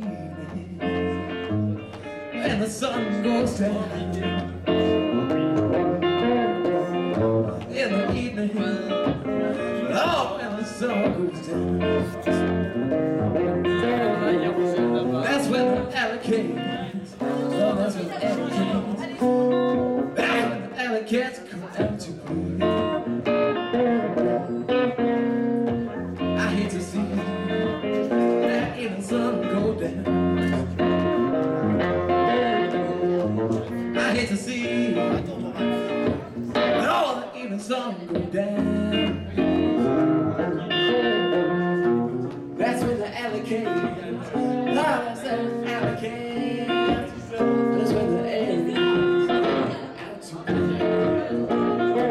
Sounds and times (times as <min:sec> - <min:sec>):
Blues: 0:00.0 - 0:52.1.